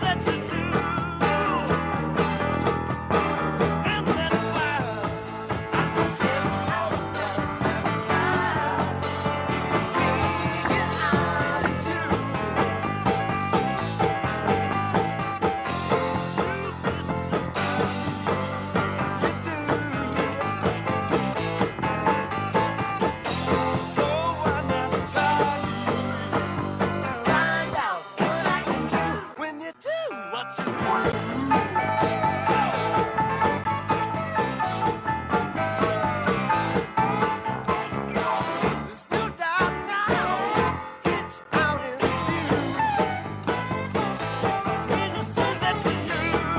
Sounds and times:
Rock and roll: 0:00.0 - 0:46.5.

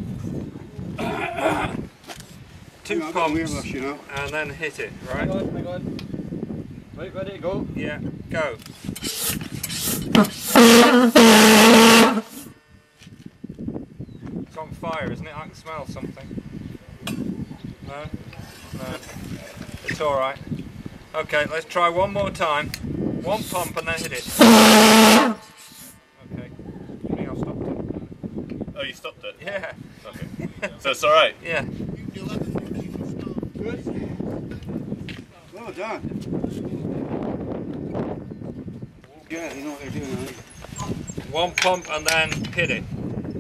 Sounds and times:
Speech: 0:02.8 - 0:05.9, 0:14.5 - 0:16.3, 0:21.1 - 0:24.3, 0:35.3 - 0:37.0, 0:39.0 - 0:40.4, 0:41.3 - 0:42.9.

